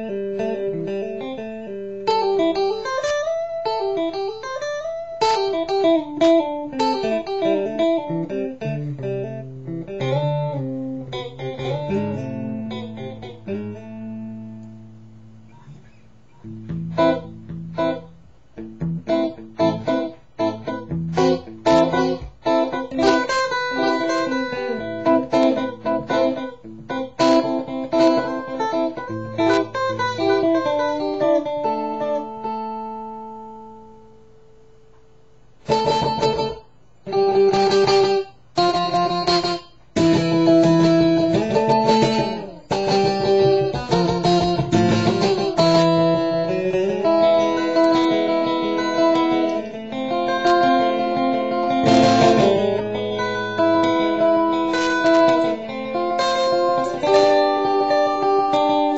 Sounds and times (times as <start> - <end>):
Effects unit: 0.0 - 58.9
Electric guitar: 0.0 - 58.9.